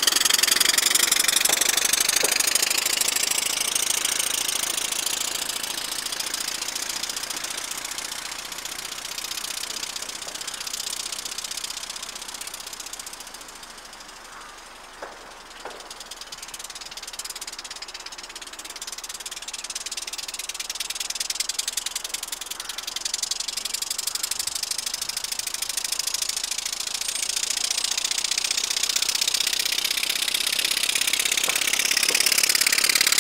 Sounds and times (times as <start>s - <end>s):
Bicycle: 0.0s - 33.2s.